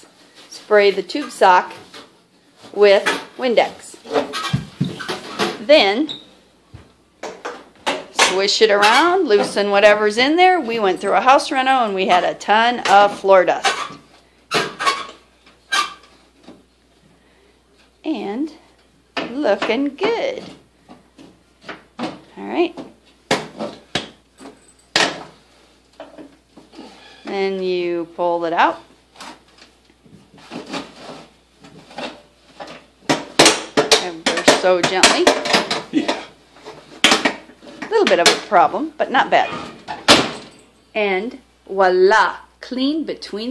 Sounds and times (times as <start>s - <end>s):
Inside, small room: 0.0s - 43.5s
Speech: 0.5s - 1.8s, 2.7s - 4.0s, 5.6s - 6.2s, 8.2s - 13.7s, 18.0s - 18.6s, 19.3s - 20.5s, 22.4s - 22.8s, 27.3s - 28.9s, 34.0s - 35.4s, 37.9s - 39.6s, 41.0s - 43.5s.